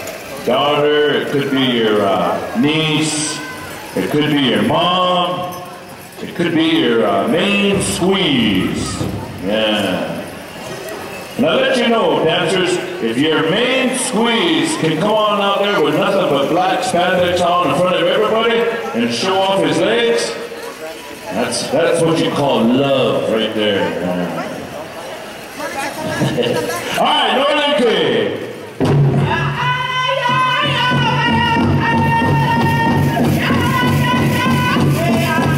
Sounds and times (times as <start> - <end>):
Speech: 0.4 - 10.3, 11.4 - 28.5, 29.2 - 35.5
Music: 30.3 - 35.5.